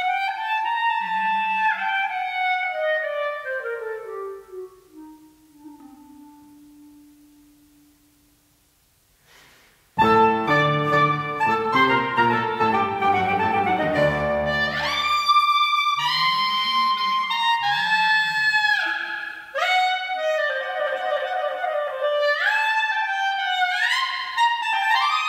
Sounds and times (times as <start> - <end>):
Clarinet: 0.0 - 8.2, 10.0 - 25.2
Piano: 10.0 - 15.2.